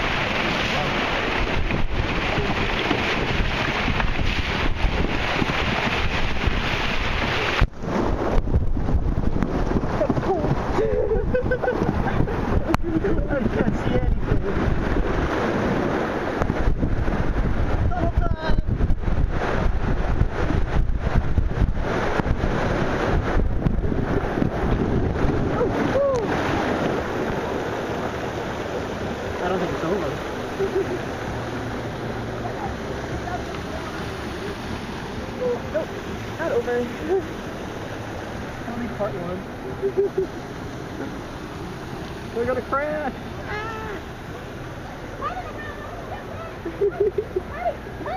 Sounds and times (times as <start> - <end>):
Waterfall: 0.0 - 48.1.